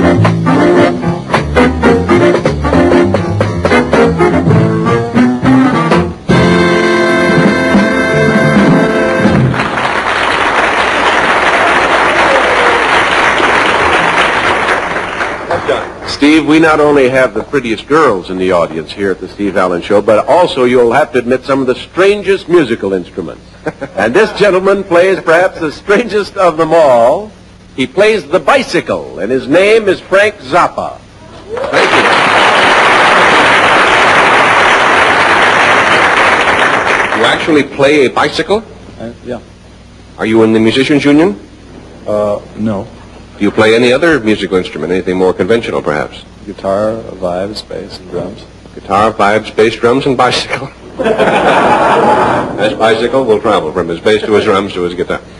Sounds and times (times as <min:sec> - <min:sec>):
Music: 0:00.0 - 0:09.8.